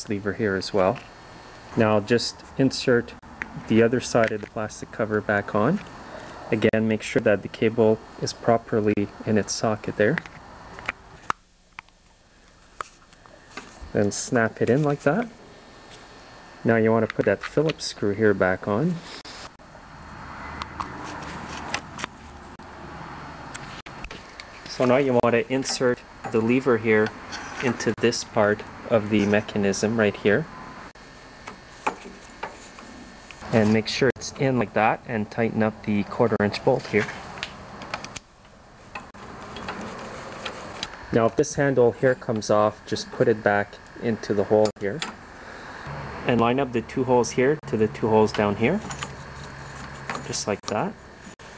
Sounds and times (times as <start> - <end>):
Speech: 0.0 - 1.0, 1.8 - 5.8, 6.5 - 10.2, 13.9 - 15.4, 16.7 - 19.0, 24.7 - 30.5, 33.4 - 37.2, 41.1 - 45.1, 46.3 - 48.9, 50.3 - 51.0.